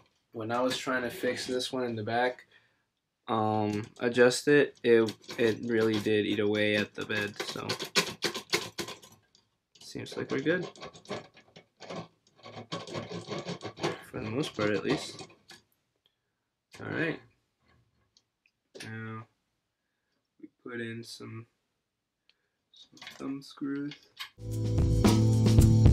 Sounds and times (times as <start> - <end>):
Speech: 0.4 - 2.4, 3.3 - 7.8, 9.8 - 10.7, 14.0 - 15.2, 16.8 - 17.3, 18.8 - 19.3, 20.5 - 21.5, 23.1 - 24.0.